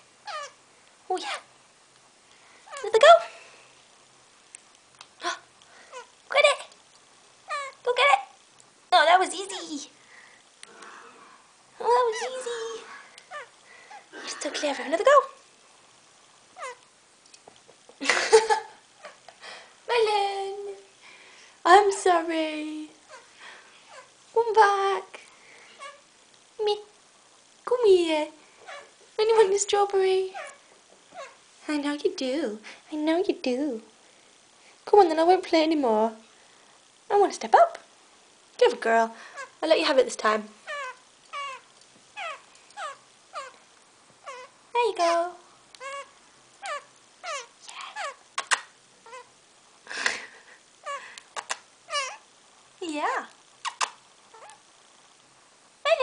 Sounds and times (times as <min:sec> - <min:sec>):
Inside, small room: 0:00.0 - 0:56.0
Domestic animals, pets: 0:00.2 - 0:00.6, 0:07.5 - 0:07.8, 0:12.1 - 0:14.1, 0:16.6 - 0:16.9, 0:23.0 - 0:24.2, 0:25.7 - 0:26.1, 0:28.6 - 0:29.0, 0:30.3 - 0:31.4, 0:40.6 - 0:43.6, 0:44.2 - 0:44.6, 0:45.7 - 0:49.4, 0:50.8 - 0:52.3, 0:53.7 - 0:54.6
Speech: 0:01.1 - 0:01.4, 0:02.7 - 0:03.4, 0:06.3 - 0:06.7, 0:07.8 - 0:10.0, 0:11.8 - 0:13.0, 0:14.2 - 0:15.4, 0:19.9 - 0:20.9, 0:21.6 - 0:23.0, 0:24.4 - 0:25.2, 0:26.6 - 0:26.9, 0:27.6 - 0:28.4, 0:29.2 - 0:30.4, 0:31.6 - 0:33.9, 0:34.9 - 0:36.2, 0:37.1 - 0:37.9, 0:38.6 - 0:40.6, 0:44.7 - 0:45.4, 0:52.8 - 0:53.4.